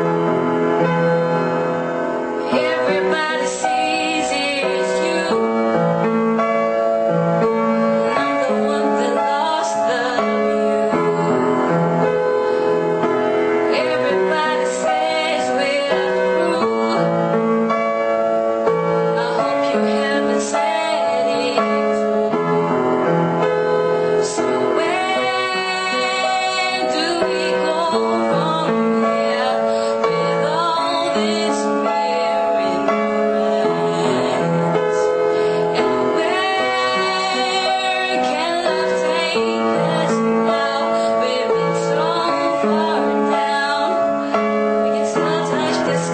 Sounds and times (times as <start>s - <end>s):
Music: 0.0s - 46.1s
Female singing: 2.4s - 5.8s, 8.0s - 11.5s, 13.7s - 17.2s, 19.2s - 22.5s, 24.2s - 35.1s, 35.7s - 46.1s.